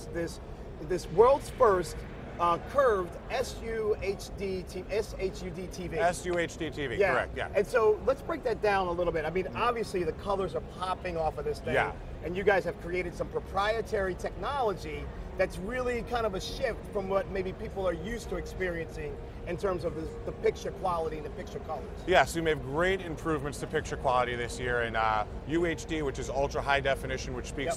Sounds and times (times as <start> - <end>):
Speech: 0.0 - 27.7.